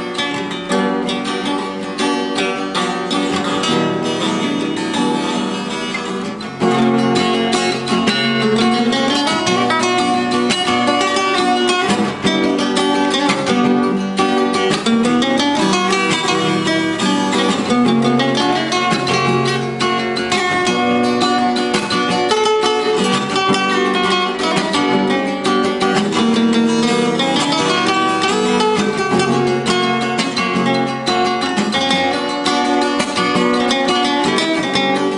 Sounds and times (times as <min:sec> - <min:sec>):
Strum: 0:00.0 - 0:35.1.